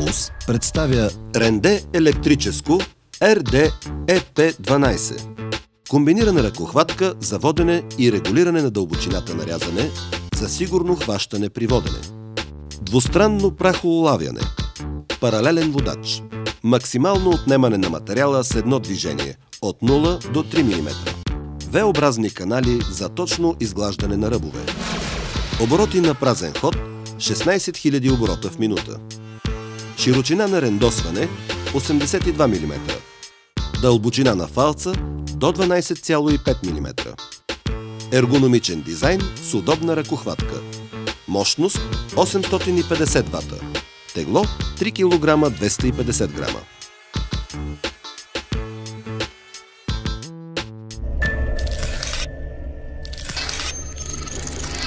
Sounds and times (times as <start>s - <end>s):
Speech: 0.0s - 5.3s, 5.9s - 12.1s, 12.8s - 14.5s, 15.2s - 21.1s, 21.7s - 24.7s, 25.6s - 29.0s, 30.0s - 33.0s, 33.8s - 37.2s, 38.1s - 40.7s, 41.3s - 46.7s
Music: 0.0s - 54.8s.